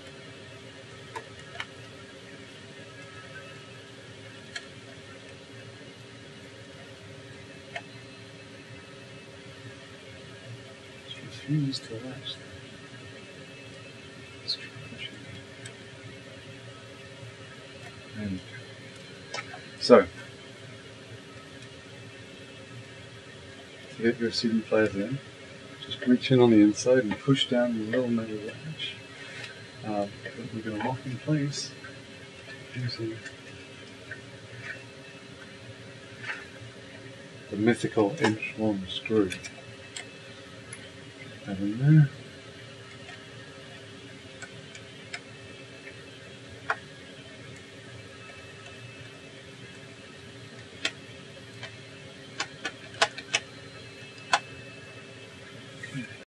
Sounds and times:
Speech: 11.1s - 12.5s, 18.2s - 18.5s, 19.8s - 20.2s, 24.0s - 25.2s, 25.8s - 29.0s, 29.8s - 31.8s, 32.8s - 33.2s, 37.5s - 39.4s, 41.5s - 42.2s.

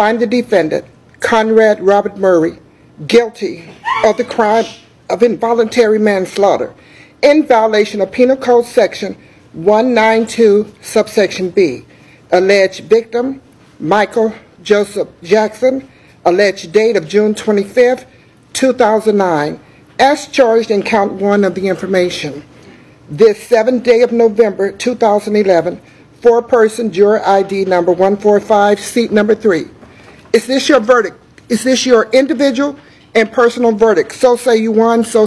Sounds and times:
Speech: 0.0s - 22.5s, 23.1s - 35.2s.

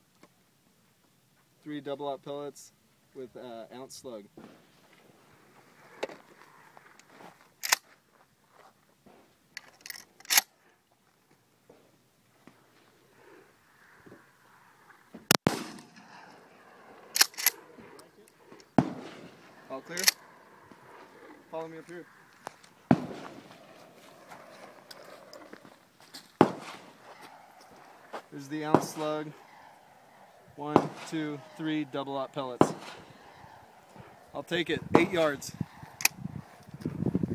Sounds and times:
Outside, rural or natural: 0.0s - 37.3s
Speech: 1.6s - 4.3s, 19.7s - 20.1s, 21.5s - 22.0s, 28.4s - 29.4s, 30.6s - 32.6s, 34.3s - 35.6s.

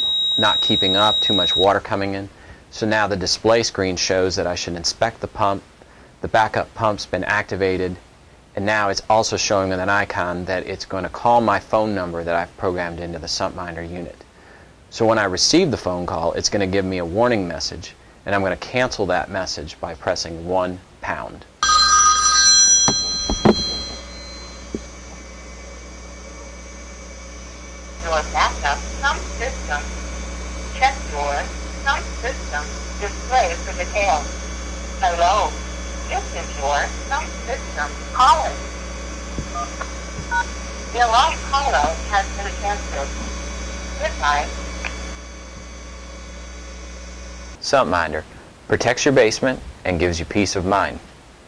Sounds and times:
Hum: 0.0s - 1.8s, 22.5s - 47.6s.

